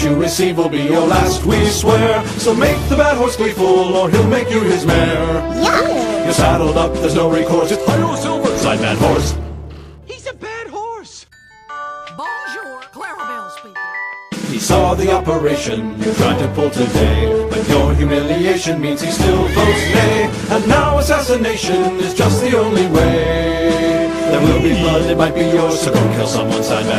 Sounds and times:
Music: 0.0s - 26.9s
Speech: 5.6s - 6.3s, 10.1s - 11.3s, 12.2s - 13.8s, 24.4s - 25.2s.

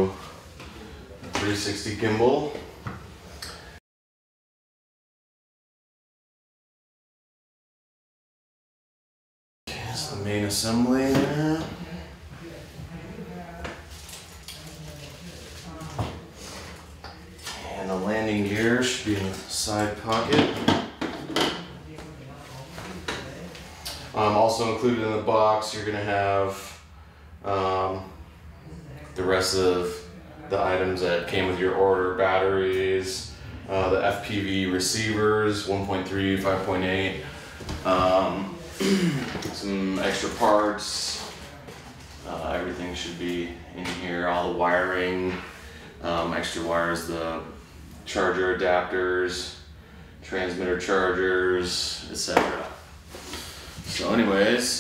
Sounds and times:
Speech: 0.0s - 2.7s, 9.7s - 20.8s, 21.4s - 52.8s, 53.8s - 54.8s.

